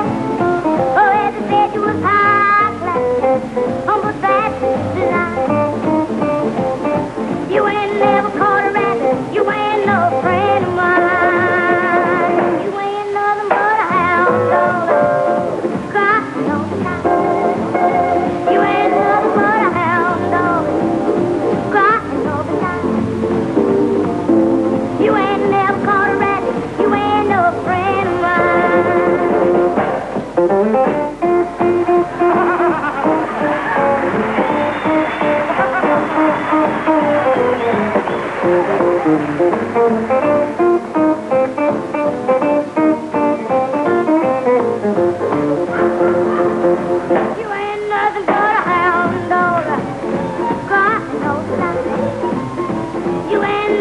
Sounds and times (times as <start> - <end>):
Music: 0.0 - 53.8.